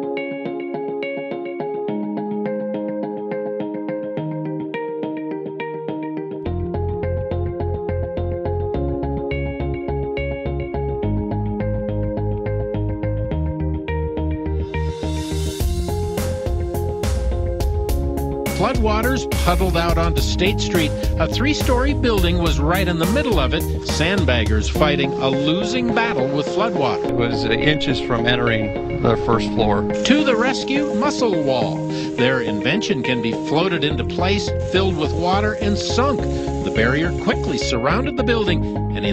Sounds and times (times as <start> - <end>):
Music: 0.0 - 39.1
Speech: 18.5 - 39.1.